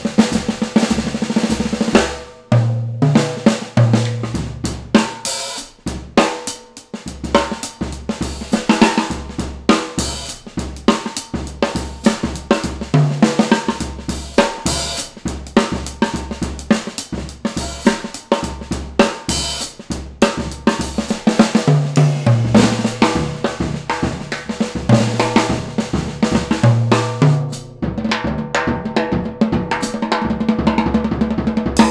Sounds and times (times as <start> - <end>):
Bass drum: 0.0 - 6.3, 7.0 - 31.9
Drum kit: 0.0 - 31.9
Drum roll: 0.0 - 31.9.